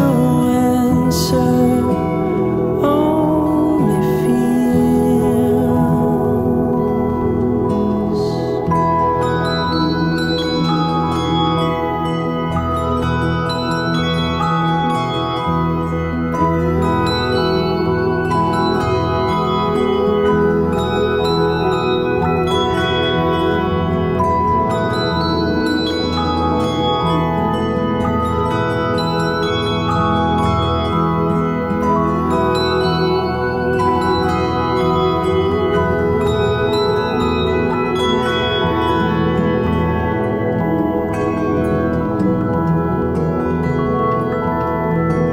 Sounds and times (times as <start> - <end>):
Music: 0.0 - 45.3.